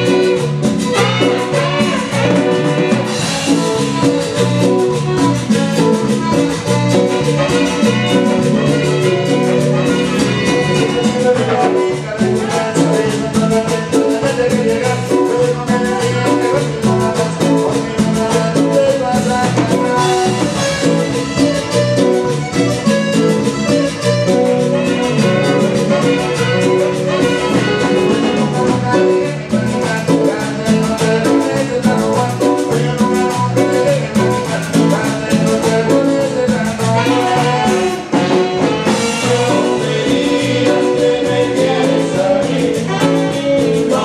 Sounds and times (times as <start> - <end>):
Funk: 0.0 - 44.0
Pop music: 0.0 - 44.0
Ska: 0.0 - 44.0.